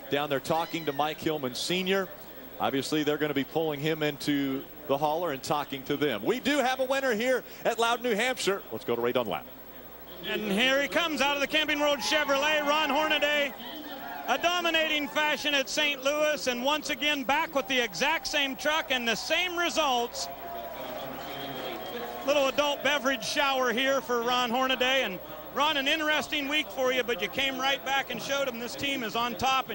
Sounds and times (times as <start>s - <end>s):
Speech: 0.0s - 9.5s, 10.2s - 20.3s, 21.1s - 29.7s.